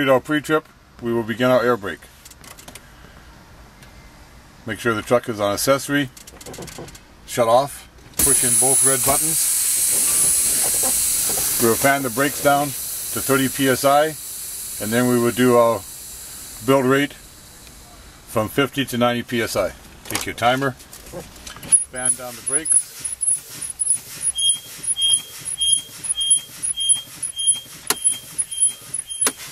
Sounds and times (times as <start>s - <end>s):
Speech: 0.0s - 2.1s, 4.6s - 6.1s, 7.3s - 9.4s, 11.6s - 14.2s, 14.8s - 15.8s, 16.6s - 17.2s, 17.8s - 21.2s, 21.9s - 22.7s.